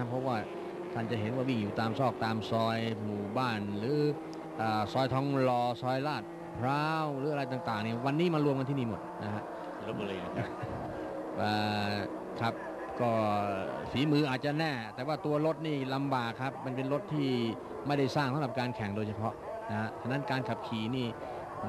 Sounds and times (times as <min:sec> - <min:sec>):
Speech: 0:00.0 - 0:10.6, 0:11.4 - 0:21.6.